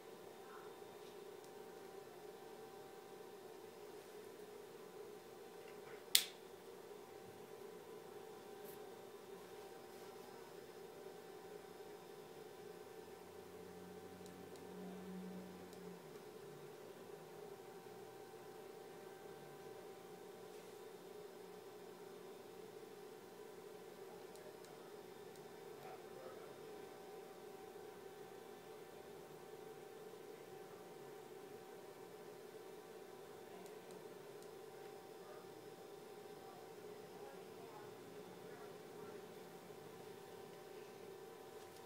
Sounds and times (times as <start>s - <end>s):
Speech: 0.4s - 0.8s, 25.8s - 26.7s, 34.8s - 39.9s.